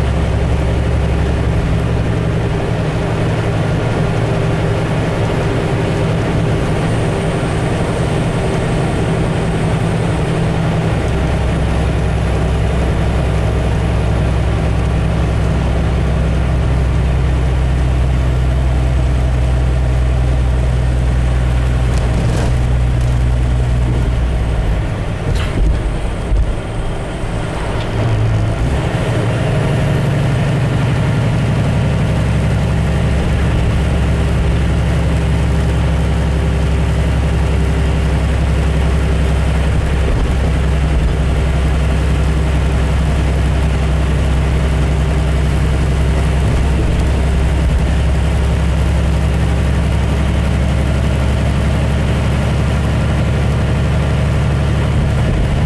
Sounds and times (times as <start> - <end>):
Vehicle: 0.0 - 55.6.